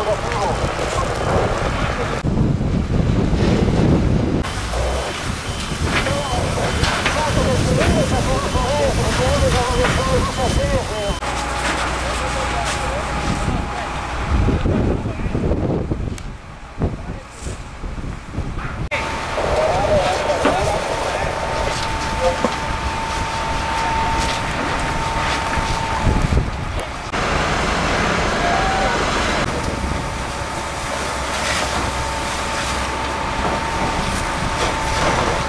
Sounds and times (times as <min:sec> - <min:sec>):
Fire: 0:00.0 - 0:35.4
Wind noise (microphone): 0:00.3 - 0:10.9, 0:13.2 - 0:19.0, 0:21.5 - 0:27.1.